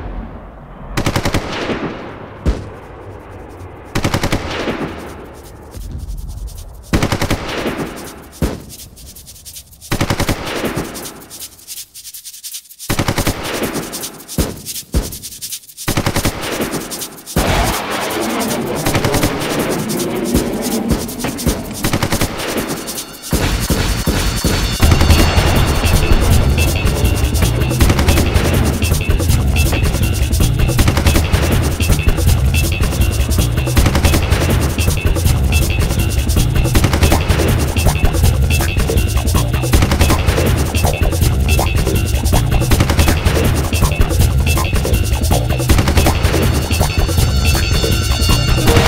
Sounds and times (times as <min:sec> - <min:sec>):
Machine gun: 0:01.0 - 0:02.8, 0:04.0 - 0:05.2, 0:06.9 - 0:08.8, 0:09.9 - 0:11.2, 0:12.9 - 0:14.7, 0:15.9 - 0:26.4, 0:27.8 - 0:29.1, 0:30.8 - 0:32.0, 0:33.8 - 0:36.0, 0:36.8 - 0:37.9, 0:39.7 - 0:41.0, 0:42.7 - 0:43.9, 0:45.7 - 0:47.3, 0:48.6 - 0:48.8.